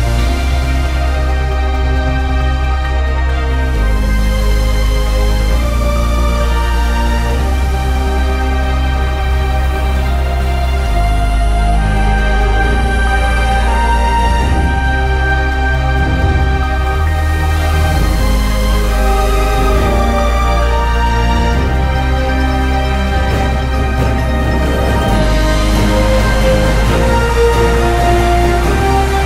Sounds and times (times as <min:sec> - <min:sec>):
Music: 0:00.0 - 0:29.2.